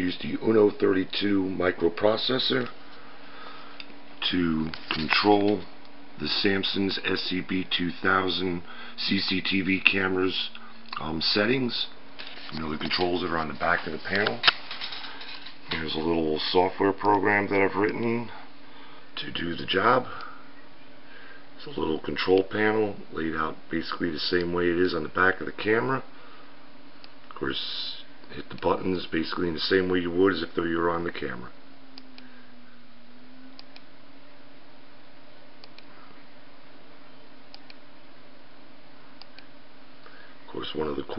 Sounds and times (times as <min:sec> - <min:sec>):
Speech: 0:00.0 - 0:02.7, 0:04.2 - 0:14.4, 0:15.7 - 0:18.4, 0:19.2 - 0:20.2, 0:21.6 - 0:26.1, 0:27.3 - 0:31.6, 0:40.5 - 0:41.1.